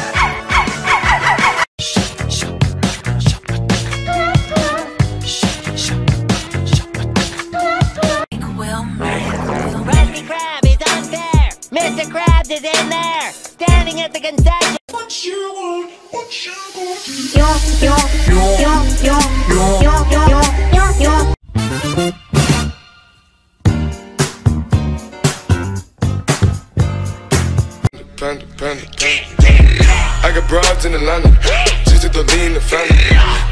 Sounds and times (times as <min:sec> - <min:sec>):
Music: 0:00.0 - 0:08.4, 0:09.0 - 0:33.5.